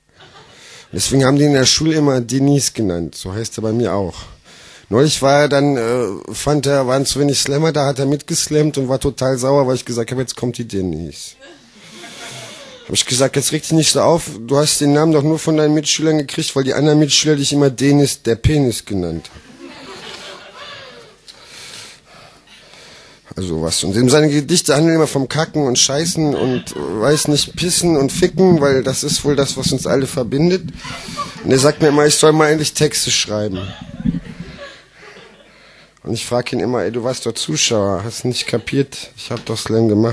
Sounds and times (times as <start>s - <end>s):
Speech: 0.9s - 11.6s, 12.9s - 19.4s, 23.3s - 30.7s, 31.4s - 33.8s, 36.0s - 40.1s.